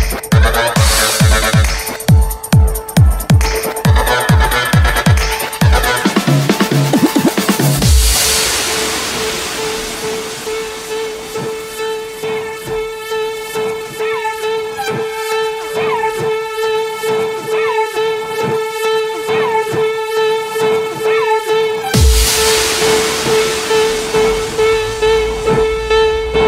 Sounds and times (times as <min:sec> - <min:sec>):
Music: 0:00.0 - 0:26.4
White noise: 0:07.3 - 0:14.0, 0:22.0 - 0:26.4.